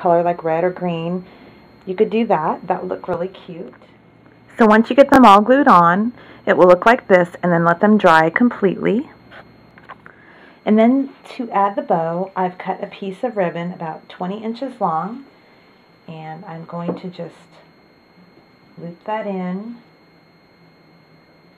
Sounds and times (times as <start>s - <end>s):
Inside, small room: 0.0s - 21.5s
Speech: 1.8s - 3.8s, 4.6s - 9.1s, 10.7s - 15.2s, 16.1s - 17.6s, 18.8s - 19.8s.